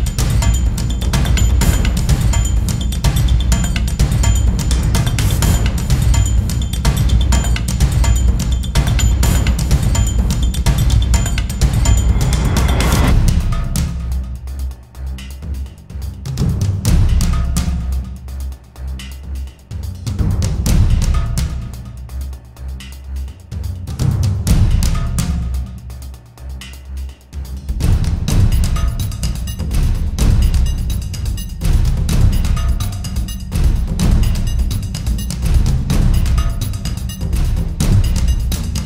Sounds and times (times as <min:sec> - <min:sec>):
Music: 0:00.0 - 0:38.8.